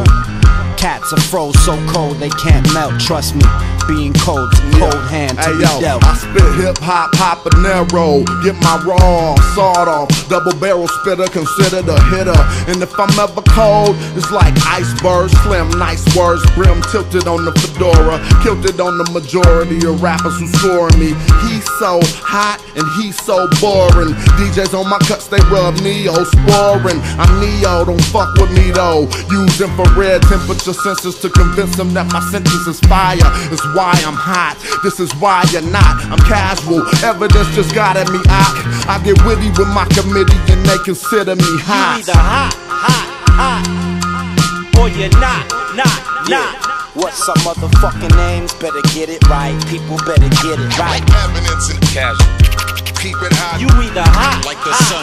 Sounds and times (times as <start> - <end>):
Hip hop music: 0.0 - 55.0.